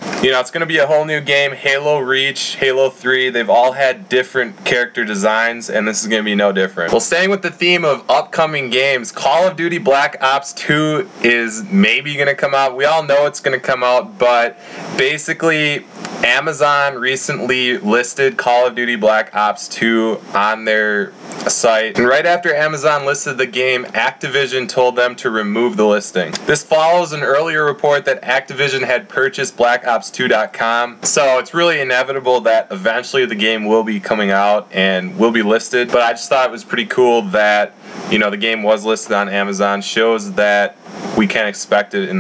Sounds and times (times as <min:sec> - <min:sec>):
Speech: 0:00.0 - 0:42.2.